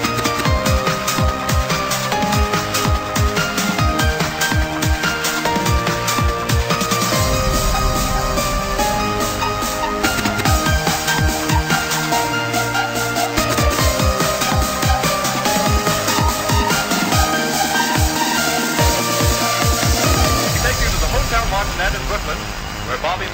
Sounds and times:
Techno: 0:00.0 - 0:23.3.

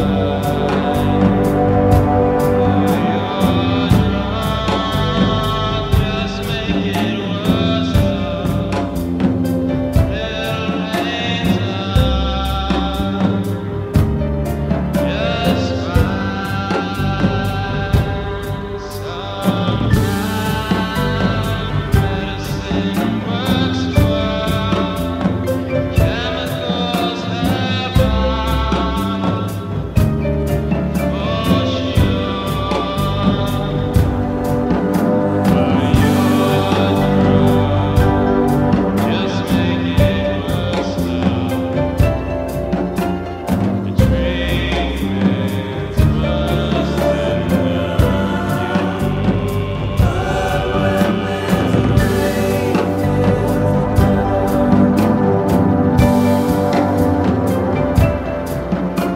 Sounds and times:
Music: 0:00.0 - 0:59.1.

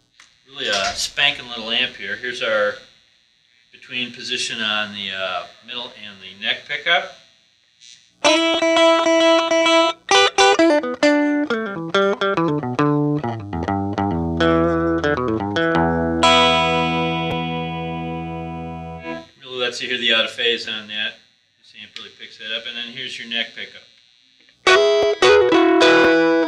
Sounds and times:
Bass guitar: 0:08.3 - 0:19.3, 0:24.7 - 0:26.4.

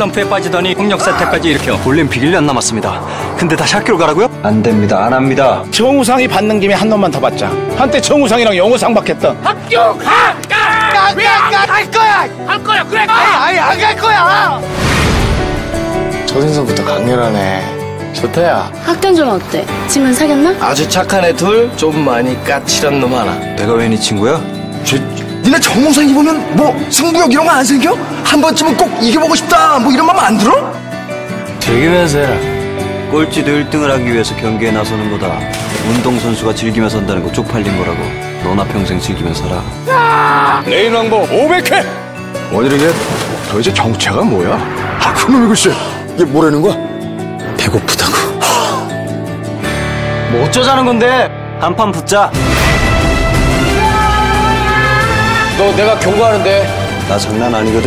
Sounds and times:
Music: 0:00.0 - 0:57.8.

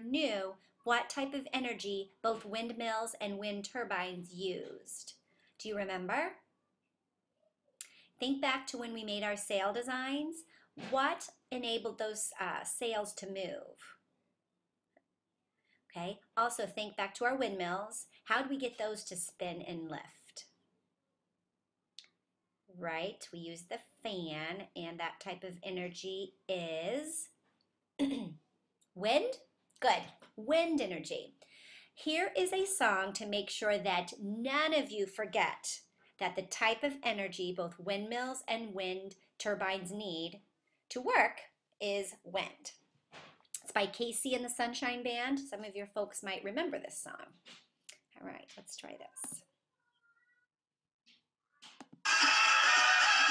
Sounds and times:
Speech: 0:00.0 - 0:06.4, 0:08.2 - 0:13.9, 0:16.0 - 0:20.4, 0:22.8 - 0:27.3, 0:29.0 - 0:31.4, 0:32.0 - 0:42.7, 0:43.6 - 0:47.3, 0:48.2 - 0:49.4.

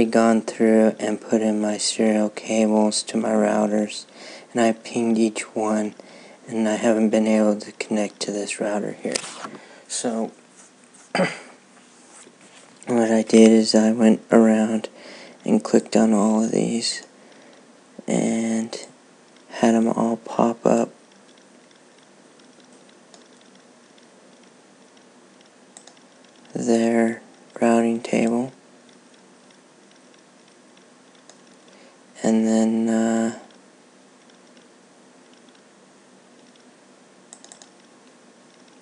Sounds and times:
Speech: 0:00.0 - 0:10.4, 0:12.9 - 0:17.1, 0:18.0 - 0:21.0, 0:26.5 - 0:28.6, 0:32.2 - 0:33.5.

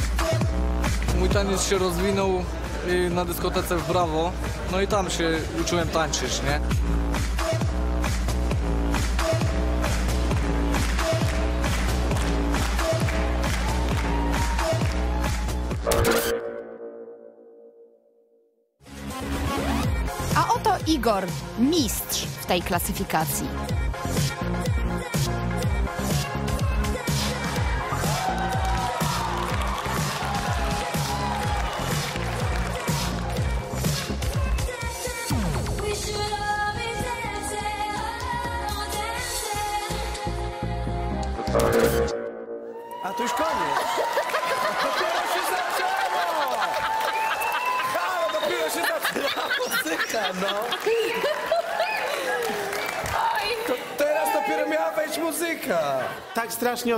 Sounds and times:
Electronic music: 0:00.0 - 0:18.1, 0:18.8 - 0:43.9.

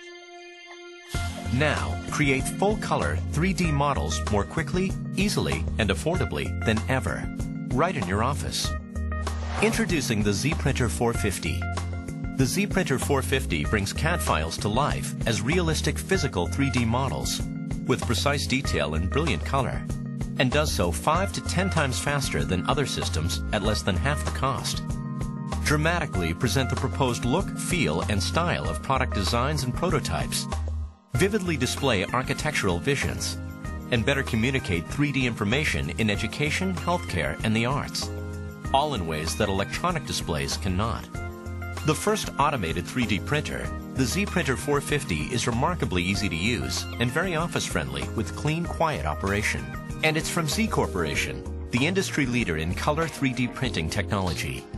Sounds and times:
Music: 0:00.0 - 0:54.7
Speech: 0:01.5 - 0:08.8, 0:09.6 - 0:11.7, 0:12.4 - 0:24.8, 0:25.6 - 0:30.5, 0:31.2 - 0:38.1, 0:38.7 - 0:41.2, 0:41.8 - 0:54.7.

